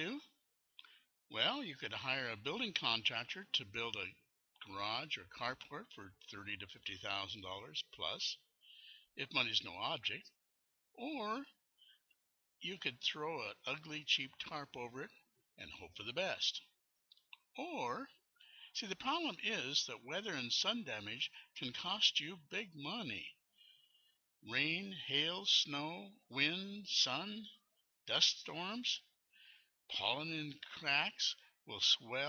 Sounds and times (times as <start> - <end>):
Speech: 0.0 - 0.4, 1.3 - 11.7, 12.6 - 23.5, 24.4 - 29.2, 29.8 - 32.2.